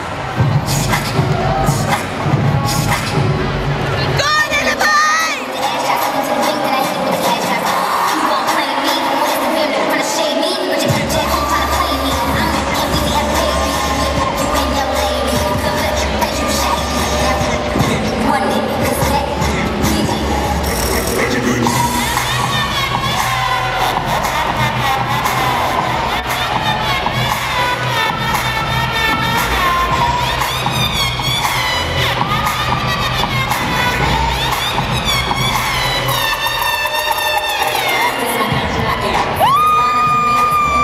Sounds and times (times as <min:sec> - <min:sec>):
Hip hop music: 0:00.0 - 0:40.8.